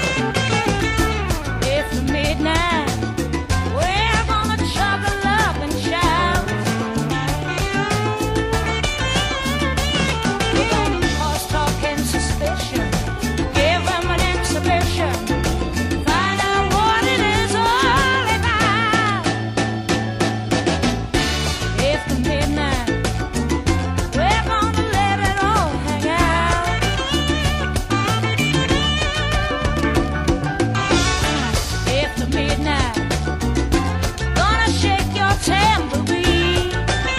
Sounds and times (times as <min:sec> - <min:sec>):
Music: 0:00.0 - 0:37.1.